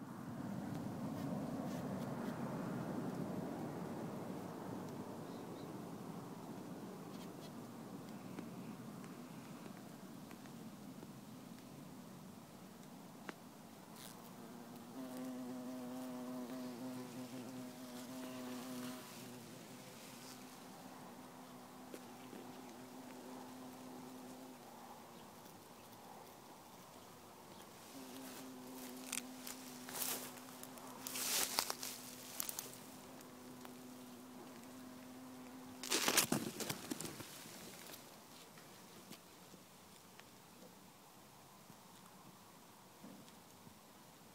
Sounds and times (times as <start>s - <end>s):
Bee, wasp, etc.: 13.2s - 44.3s
Fly, housefly: 14.0s - 26.4s, 27.4s - 38.0s.